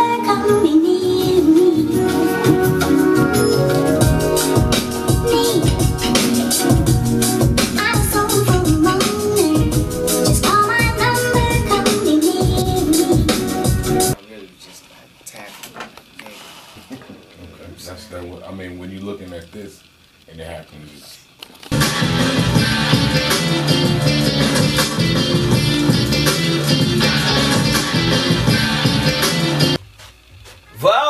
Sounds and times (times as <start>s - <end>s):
Music: 0.0s - 14.2s, 21.7s - 30.8s
Speech: 17.4s - 21.3s.